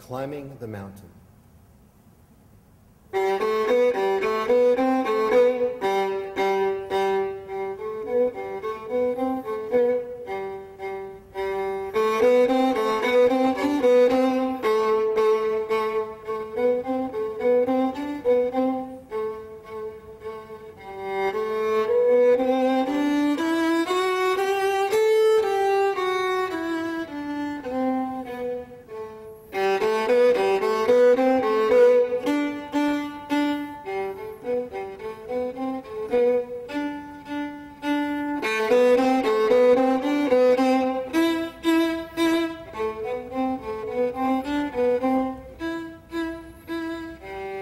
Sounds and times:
Violin, fiddle: 3.1s - 47.6s.

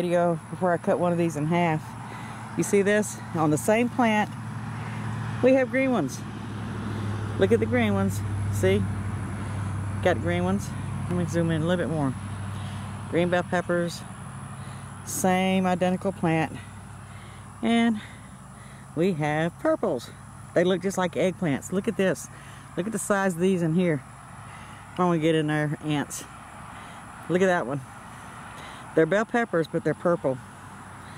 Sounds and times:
Speech: 0.0s - 1.9s, 2.6s - 4.3s, 5.4s - 6.2s, 7.4s - 8.9s, 10.0s - 12.2s, 13.1s - 14.1s, 15.1s - 16.6s, 17.6s - 18.1s, 19.0s - 24.0s, 25.0s - 26.3s, 27.3s - 27.9s, 29.0s - 30.4s.

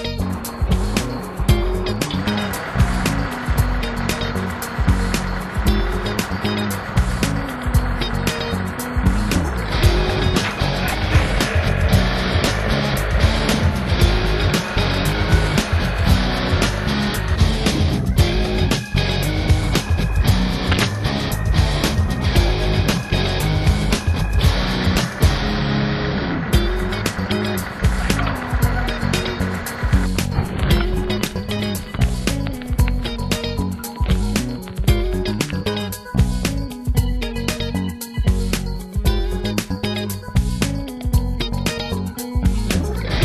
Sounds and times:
Music: 0.0s - 43.2s.

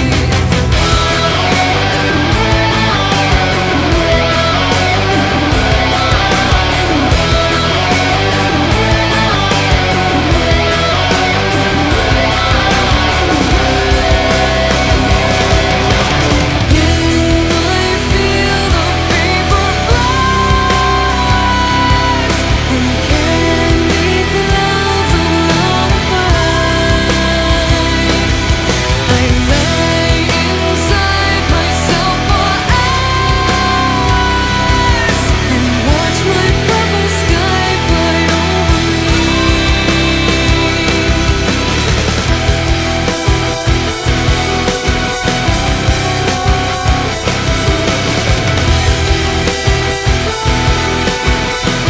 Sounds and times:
Music: 0.0s - 51.8s.

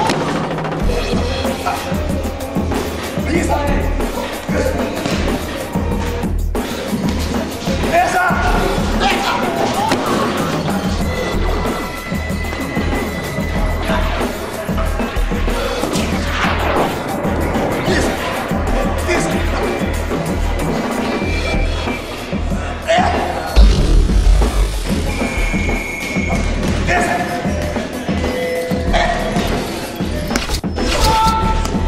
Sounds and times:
Music: 0.0s - 31.8s.

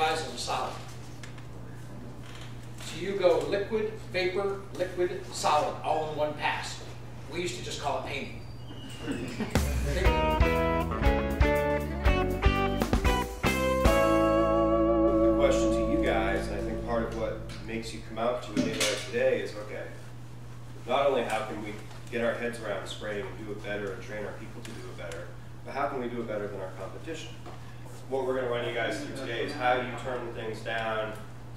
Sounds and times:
Speech: 0.0s - 0.9s, 2.8s - 8.4s, 15.4s - 20.0s, 20.8s - 27.4s, 28.1s - 31.3s
Music: 9.5s - 18.1s.

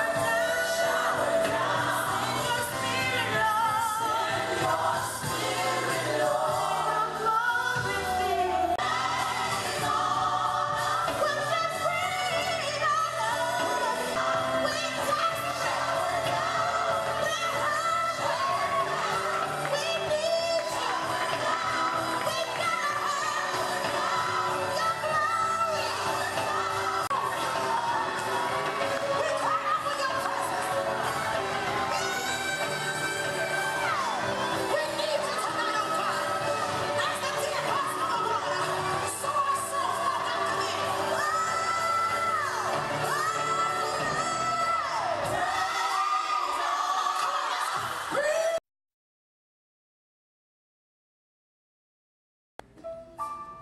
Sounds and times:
Music: 0.0s - 48.6s, 52.6s - 53.6s.

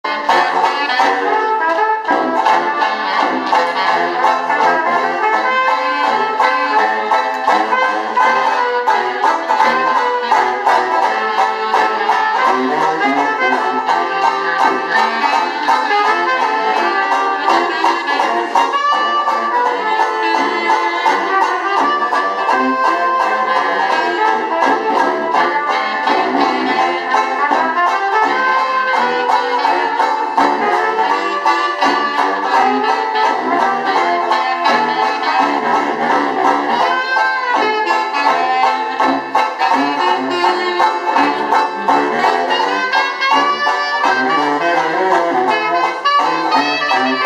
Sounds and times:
Banjo: 0.0s - 47.2s
Bluegrass: 0.0s - 47.2s
Clarinet: 0.0s - 47.2s
Trumpet: 0.0s - 47.2s.

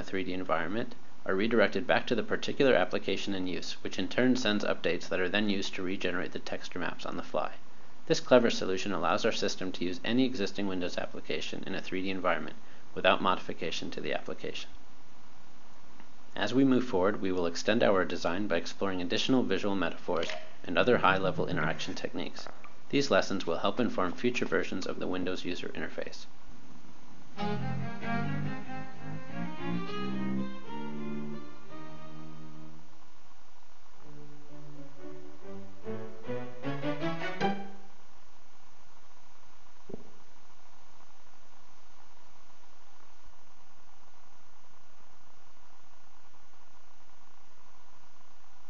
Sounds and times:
Bowed string instrument: 27.4s - 32.8s, 34.0s - 37.9s.

